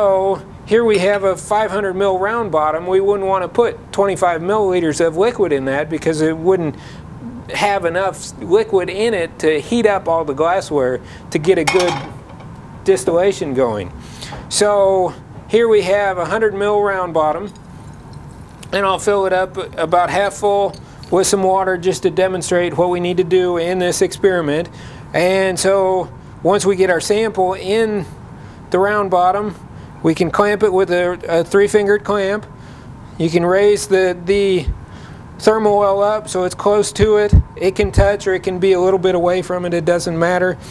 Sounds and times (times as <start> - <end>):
Speech: 0.0 - 12.1, 12.8 - 17.5, 18.7 - 32.5, 33.2 - 34.8, 35.4 - 40.6.